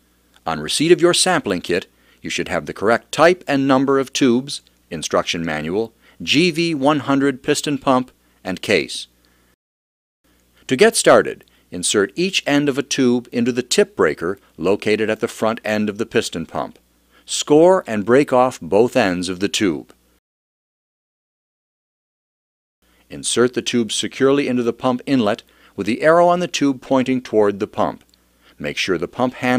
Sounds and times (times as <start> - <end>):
Speech: 0.4 - 9.1, 10.7 - 20.0, 23.1 - 29.5.